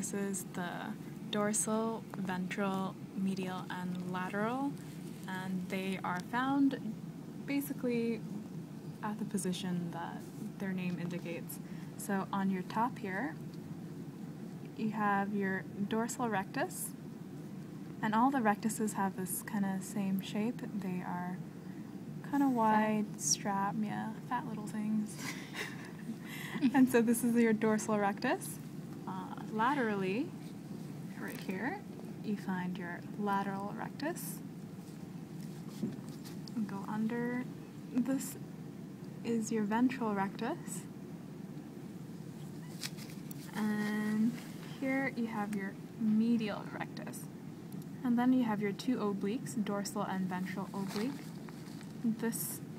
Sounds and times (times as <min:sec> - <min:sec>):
Speech: 0:00.0 - 0:08.3, 0:09.0 - 0:13.4, 0:14.8 - 0:17.0, 0:18.0 - 0:21.4, 0:22.2 - 0:25.3, 0:26.6 - 0:30.3, 0:31.2 - 0:34.4, 0:36.6 - 0:38.4, 0:39.3 - 0:40.9, 0:43.5 - 0:47.3, 0:48.0 - 0:51.2, 0:52.0 - 0:52.6.